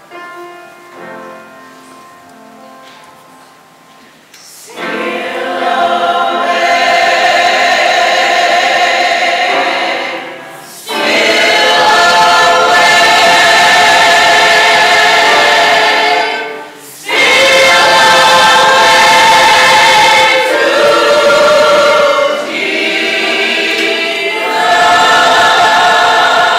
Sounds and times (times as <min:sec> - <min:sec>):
Gospel music: 0:00.0 - 0:26.5.